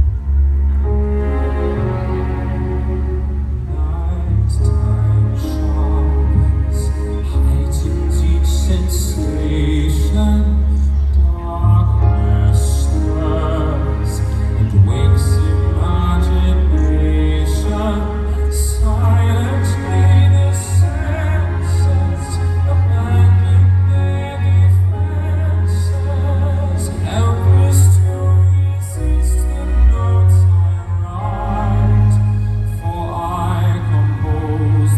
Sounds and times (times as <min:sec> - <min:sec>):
Sad music: 0:00.0 - 0:34.9.